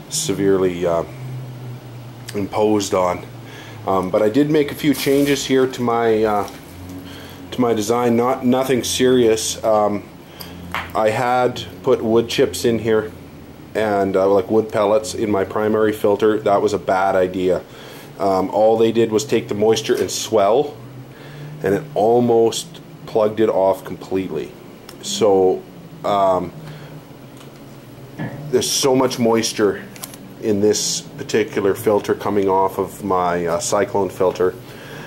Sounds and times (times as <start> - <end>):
Speech: 0.1 - 1.2, 2.3 - 3.3, 3.9 - 6.6, 7.5 - 10.1, 11.0 - 13.2, 13.8 - 20.8, 21.6 - 26.6, 28.5 - 34.6.